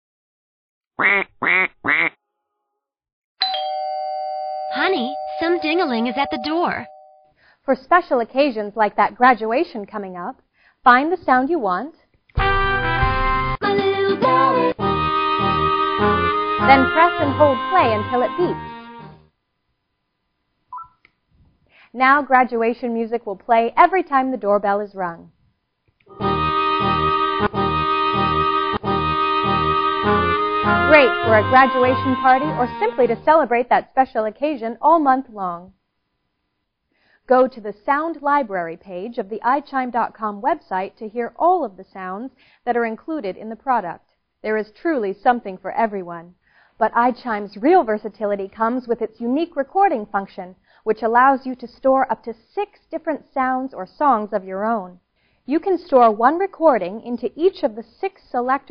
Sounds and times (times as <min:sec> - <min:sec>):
Doorbell: 0:03.4 - 0:07.3
Speech: 0:04.8 - 0:06.9, 0:07.7 - 0:12.0, 0:16.7 - 0:18.6, 0:22.0 - 0:25.3, 0:30.9 - 0:35.8, 0:37.3 - 0:58.7.